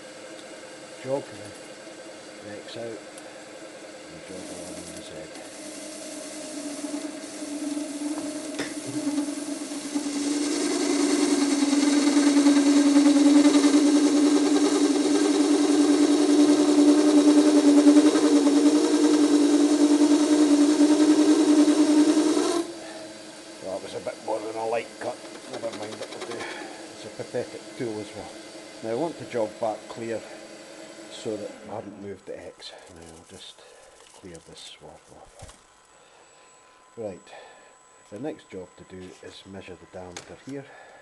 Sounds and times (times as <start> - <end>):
Speech: 1.0 - 1.6, 2.4 - 3.0, 4.1 - 5.4, 23.6 - 26.1, 27.0 - 30.3, 31.1 - 33.6, 34.2 - 35.4, 37.0 - 37.4, 38.1 - 40.7.